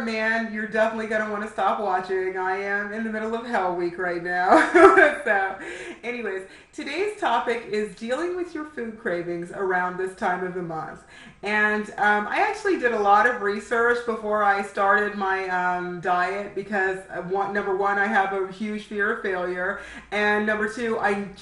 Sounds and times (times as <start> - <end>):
Speech: 0.0 - 21.4.